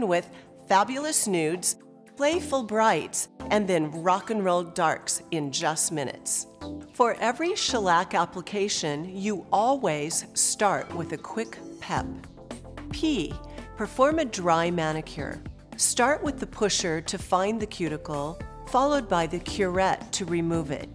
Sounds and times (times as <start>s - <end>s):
Speech: 0.0s - 12.2s, 13.0s - 20.9s
Music: 0.0s - 20.9s.